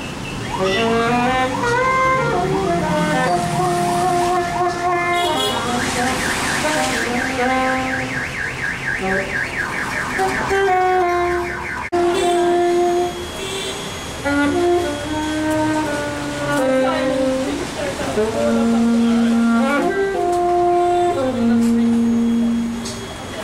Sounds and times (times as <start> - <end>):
Vehicle: 0.0 - 23.4
Music: 0.6 - 8.1, 12.0 - 13.3, 14.2 - 17.6, 18.2 - 23.4.